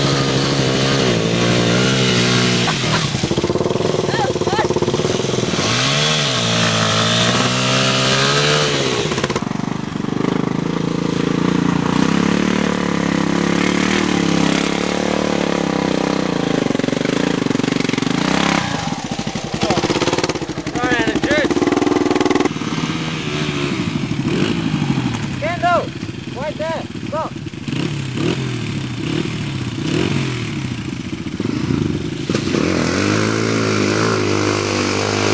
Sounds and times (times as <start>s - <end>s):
Speech: 20.7s - 21.5s, 25.4s - 27.4s.